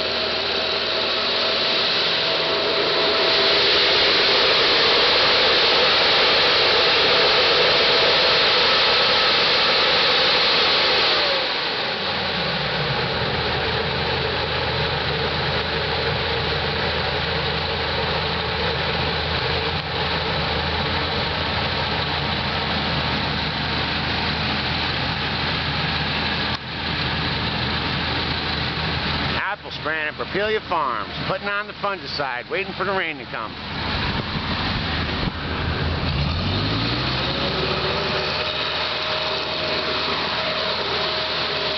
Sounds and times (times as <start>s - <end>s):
Speech: 29.4s - 33.6s.